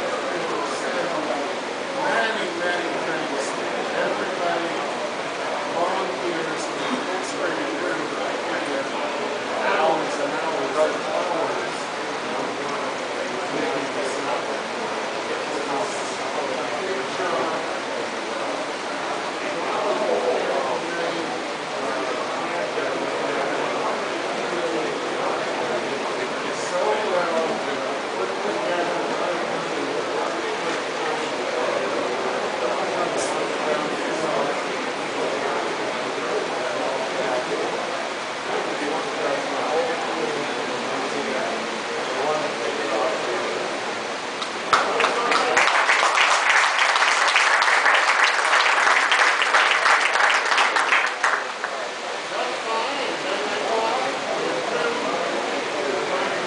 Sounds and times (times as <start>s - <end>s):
Speech: 0.0s - 56.4s.